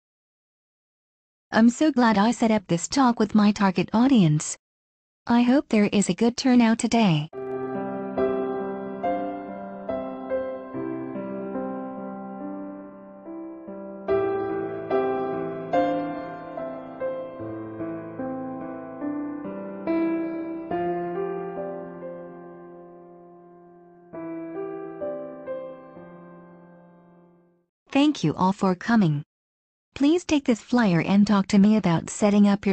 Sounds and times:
Speech: 1.6s - 4.6s, 5.3s - 7.4s, 27.9s - 29.3s, 30.0s - 32.7s
Music: 7.4s - 27.7s.

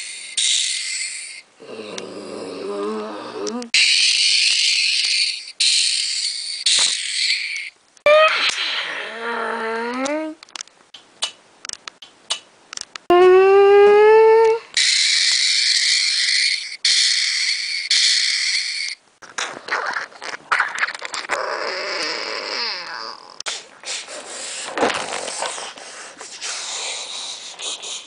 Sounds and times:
Inside, small room: 0.0s - 28.0s.

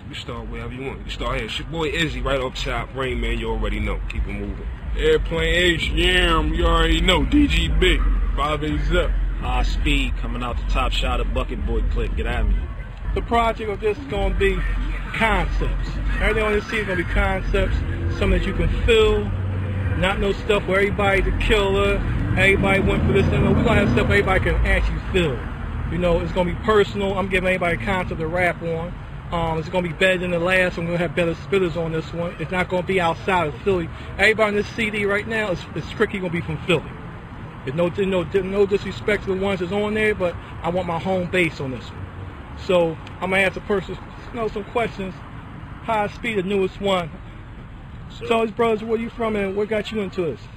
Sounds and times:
Speech: 0.0s - 36.9s, 37.7s - 42.0s, 42.6s - 45.2s, 45.8s - 47.2s, 48.1s - 50.5s.

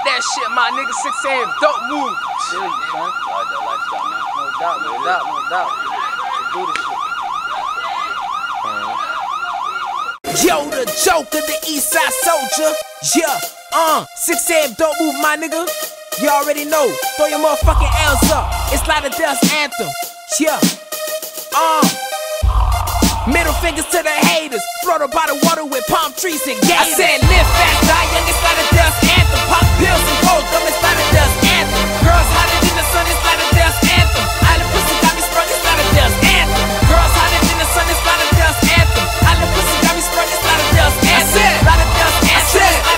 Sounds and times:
Music: 10.2s - 42.9s.

